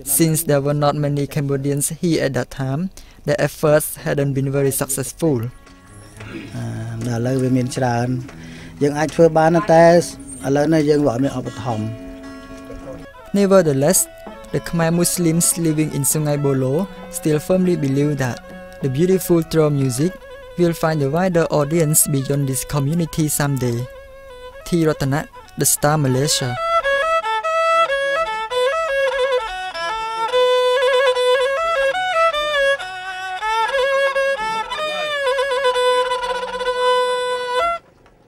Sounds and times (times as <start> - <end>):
Music: 4.0 - 38.2.